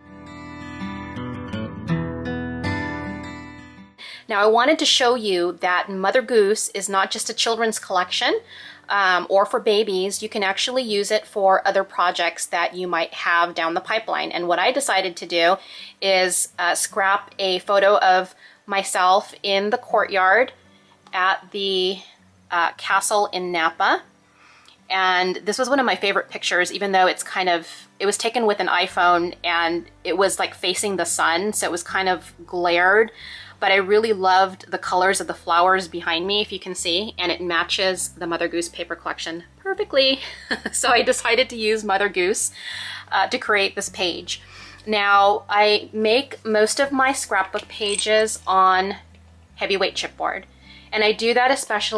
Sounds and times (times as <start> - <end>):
Music: 0.0 - 51.9
Speech: 4.0 - 24.1, 24.9 - 49.0, 49.6 - 51.9.